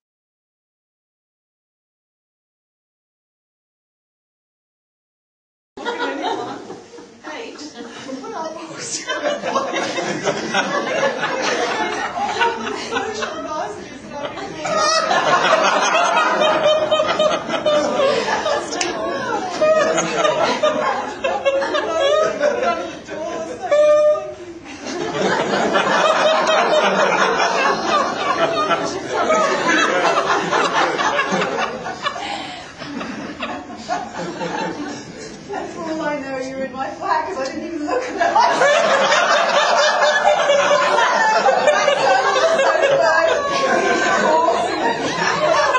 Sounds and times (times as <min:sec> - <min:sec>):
Snicker: 0:05.8 - 0:07.1, 0:07.8 - 0:35.4, 0:37.9 - 0:45.7
Speech: 0:05.8 - 0:09.8, 0:11.5 - 0:15.1, 0:21.7 - 0:24.4, 0:35.5 - 0:38.4, 0:40.7 - 0:45.7.